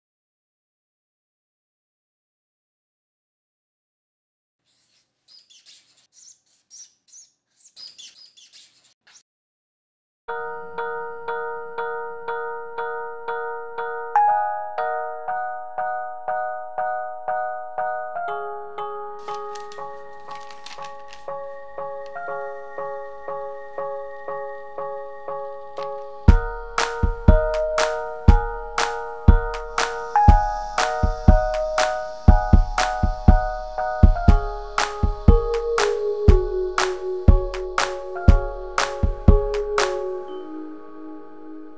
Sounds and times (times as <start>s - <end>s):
Bird vocalization, bird call, bird song: 4.7s - 9.2s.